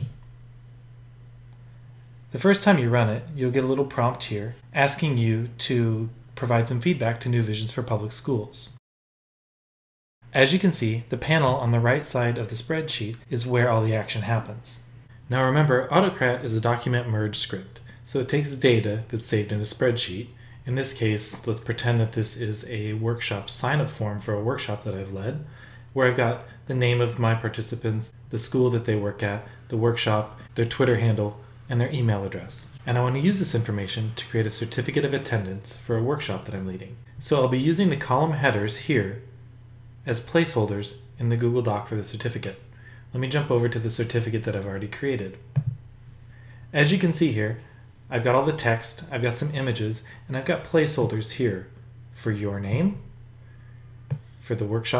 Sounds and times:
Speech: 0.0s - 0.2s, 2.3s - 8.8s, 10.3s - 39.4s, 40.0s - 45.6s, 46.7s - 53.2s, 54.4s - 55.0s
Inside, small room: 0.0s - 8.8s, 10.2s - 55.0s.

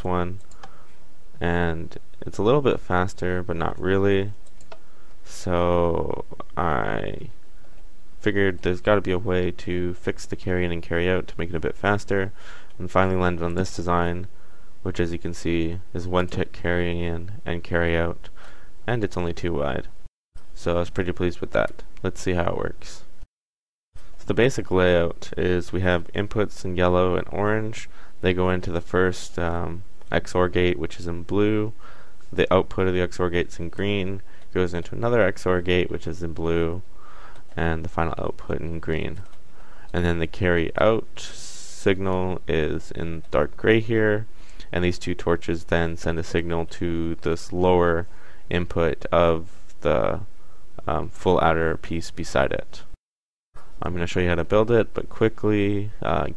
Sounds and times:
Speech: 0.0s - 0.4s, 1.4s - 4.4s, 5.3s - 7.4s, 8.2s - 18.3s, 18.9s - 19.9s, 20.6s - 23.1s, 24.2s - 36.9s, 37.6s - 39.3s, 39.9s - 53.0s, 53.8s - 56.3s.

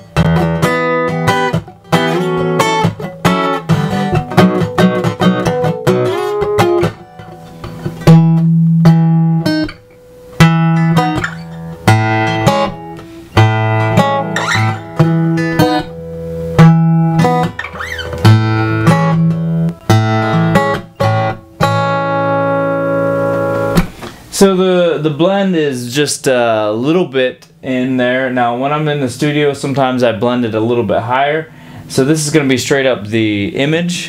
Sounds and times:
Guitar: 0.0s - 34.0s.

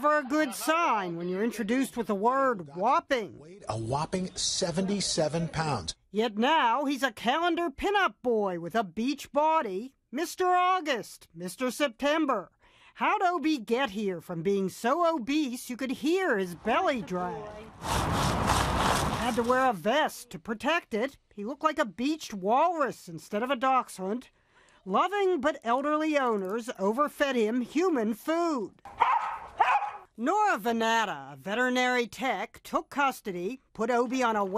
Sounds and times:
Speech: 0.0s - 17.7s, 19.2s - 24.3s.

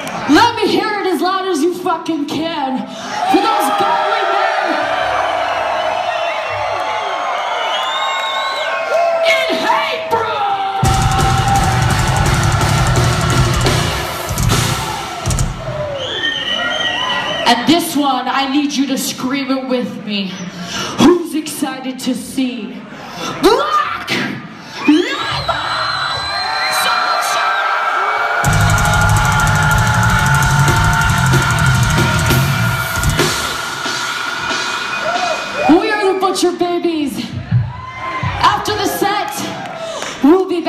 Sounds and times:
Music: 10.8s - 15.9s, 28.5s - 35.8s.

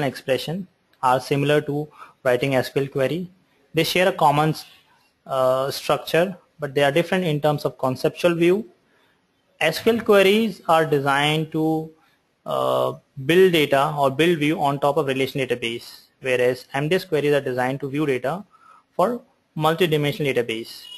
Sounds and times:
Speech: 0.0s - 8.8s, 9.6s - 20.9s.

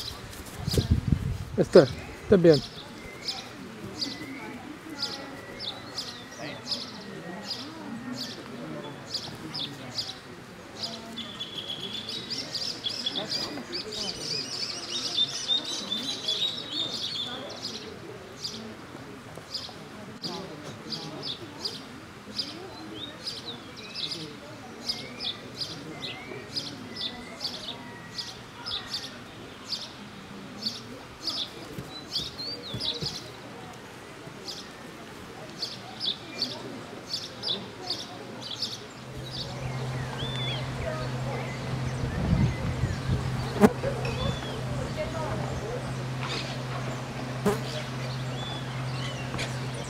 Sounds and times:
Speech: 0.0s - 49.9s.

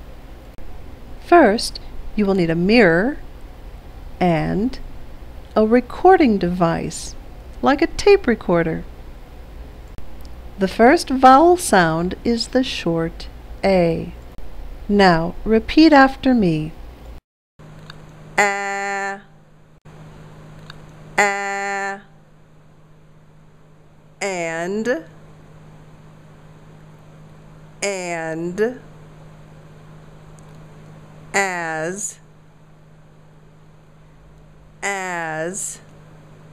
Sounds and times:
Speech: 1.2s - 3.2s, 4.2s - 4.8s, 5.5s - 8.9s, 10.6s - 14.2s, 14.9s - 16.8s, 24.2s - 25.2s, 27.8s - 28.8s, 31.4s - 32.2s, 34.8s - 35.9s.

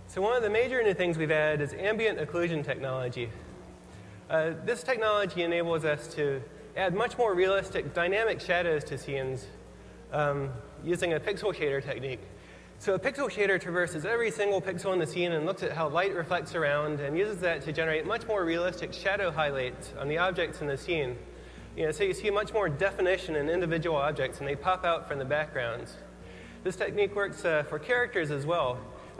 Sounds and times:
Speech: 0.1s - 3.5s, 4.3s - 29.1s.

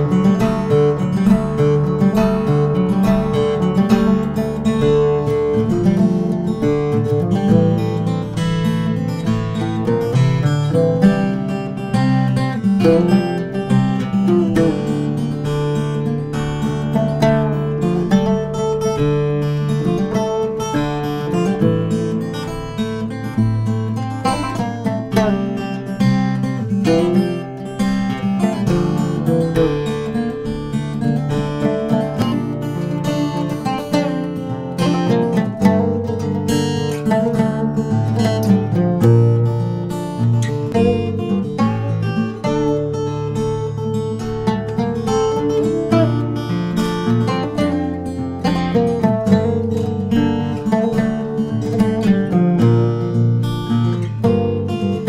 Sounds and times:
Guitar: 0.0s - 55.0s.

